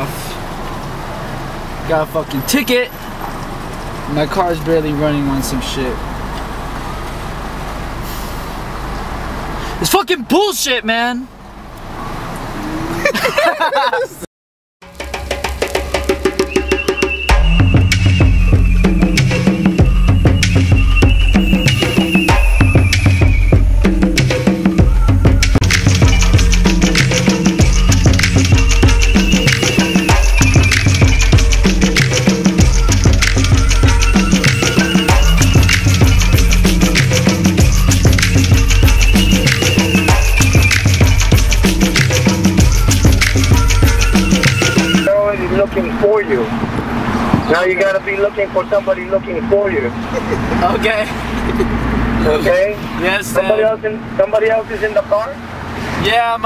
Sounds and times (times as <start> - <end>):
Speech: 1.8 - 3.0, 4.1 - 6.0, 9.8 - 11.3, 45.1 - 46.5, 47.5 - 50.0, 52.2 - 55.4, 56.0 - 56.4.